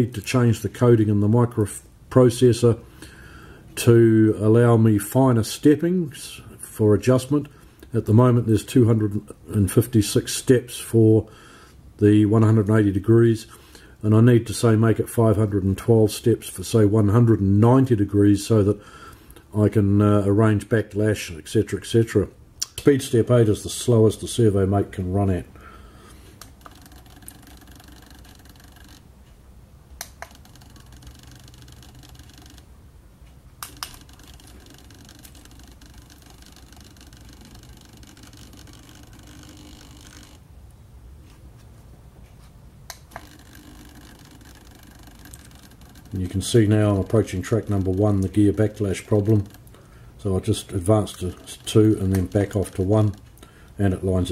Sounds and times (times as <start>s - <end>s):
Speech: 0.0s - 2.8s, 3.8s - 11.3s, 12.0s - 18.8s, 19.5s - 25.5s, 46.1s - 49.6s, 50.2s - 53.2s, 53.8s - 54.3s.